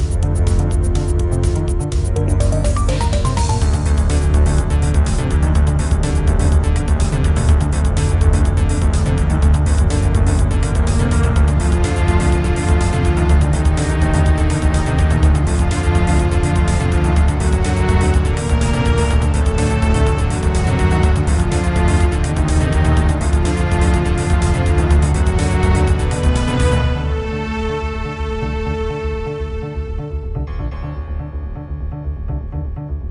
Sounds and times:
Video game music: 0.0s - 33.1s.

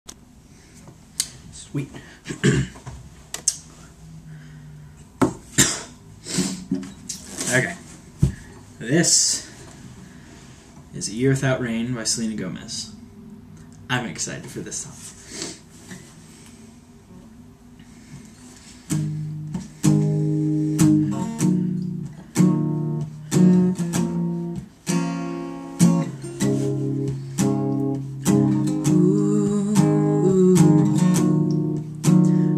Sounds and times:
Speech: 1.5s - 2.0s, 7.4s - 7.8s, 8.8s - 9.5s, 10.9s - 13.0s, 13.9s - 15.1s.

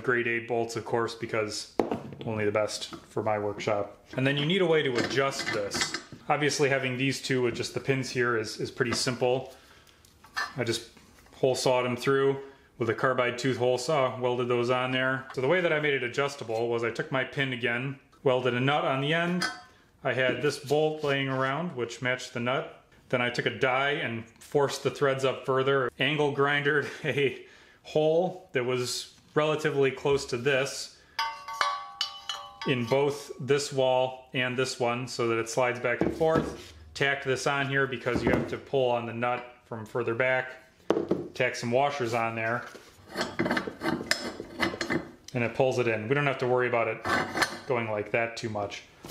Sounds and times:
Speech: 0.0s - 9.5s, 10.5s - 31.0s, 32.7s - 40.6s, 41.4s - 42.8s, 45.3s - 48.9s
Tools: 5.0s - 6.2s, 10.2s - 10.6s, 19.4s - 19.7s, 31.2s - 33.2s, 43.0s - 45.2s, 47.0s - 47.7s.

